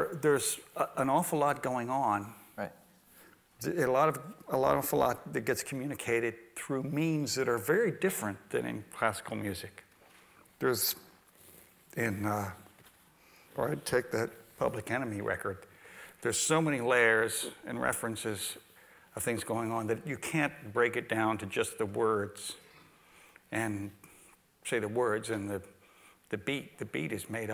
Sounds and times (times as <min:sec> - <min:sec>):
Speech: 0:00.0 - 0:02.8, 0:03.6 - 0:09.8, 0:10.6 - 0:11.1, 0:11.9 - 0:12.6, 0:13.6 - 0:15.6, 0:16.2 - 0:22.6, 0:23.5 - 0:24.0, 0:24.6 - 0:25.7, 0:26.3 - 0:27.5.